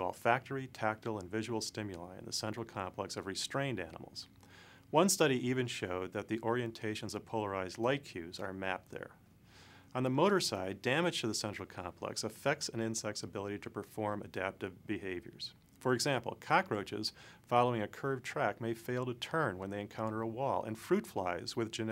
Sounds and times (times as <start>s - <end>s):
Speech: 0.0s - 4.3s, 4.9s - 9.2s, 9.9s - 21.9s.